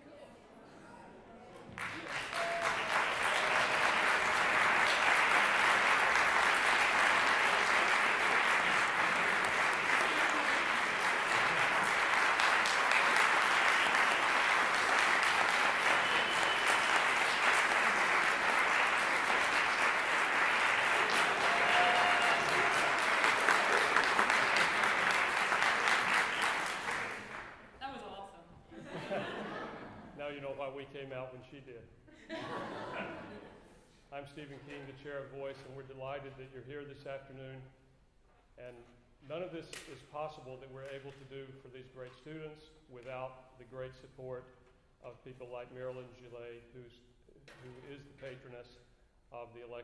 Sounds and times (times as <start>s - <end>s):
Speech: 30.2s - 31.9s, 34.1s - 37.8s, 38.6s - 49.8s.